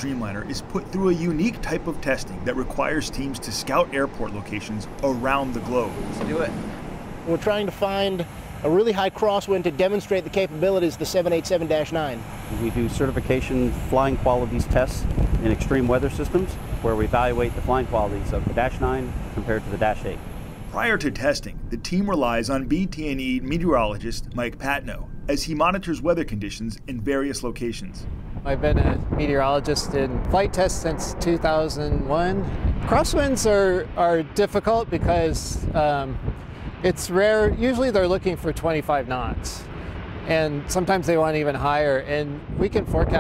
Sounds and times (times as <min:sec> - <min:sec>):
Speech: 0:00.0 - 0:06.5, 0:07.3 - 0:36.2, 0:36.8 - 0:39.7, 0:40.3 - 0:43.2.